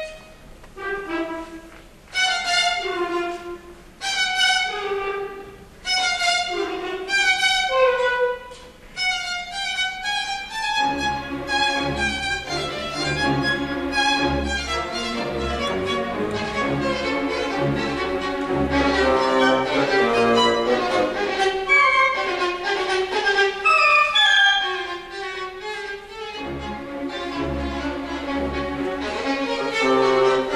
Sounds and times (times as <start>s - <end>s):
Violin, fiddle: 0.0s - 30.5s.